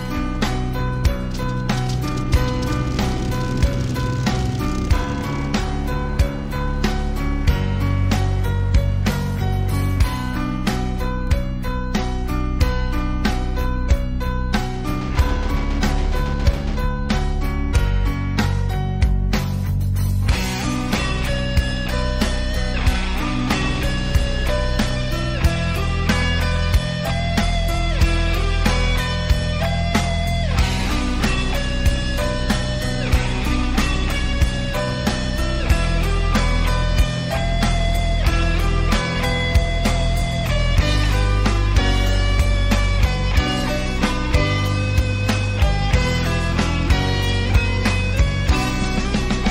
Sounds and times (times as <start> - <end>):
Music: 0.0 - 49.5.